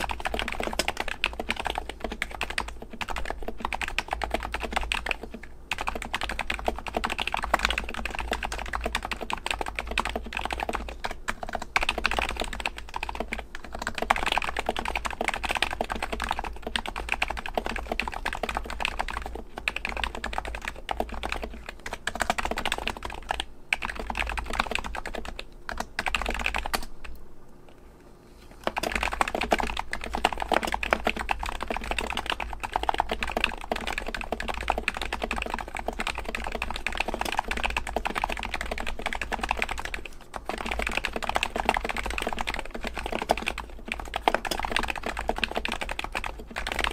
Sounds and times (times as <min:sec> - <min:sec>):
Computer keyboard: 0:00.0 - 0:27.2, 0:28.6 - 0:46.9.